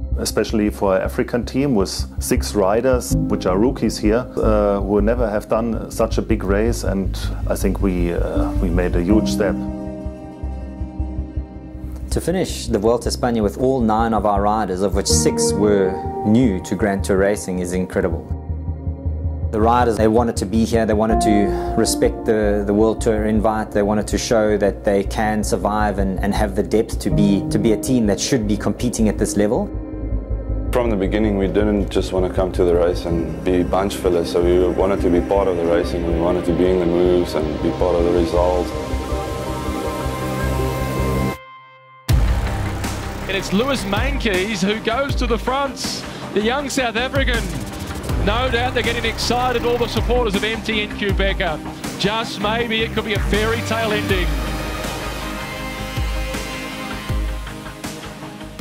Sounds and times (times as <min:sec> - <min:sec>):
Music: 0:00.0 - 0:58.6
Speech: 0:00.1 - 0:09.7, 0:12.1 - 0:18.3, 0:19.6 - 0:29.7, 0:30.7 - 0:38.8, 0:43.3 - 0:54.4.